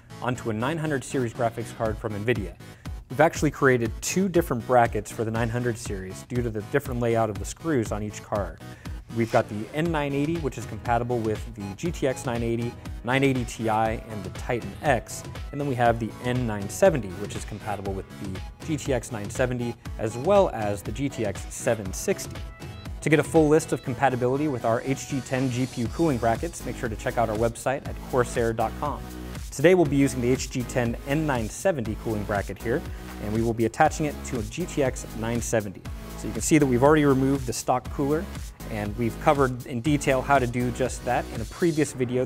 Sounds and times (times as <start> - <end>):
Music: 0.0 - 42.2
Speech: 0.2 - 22.3, 23.0 - 42.2.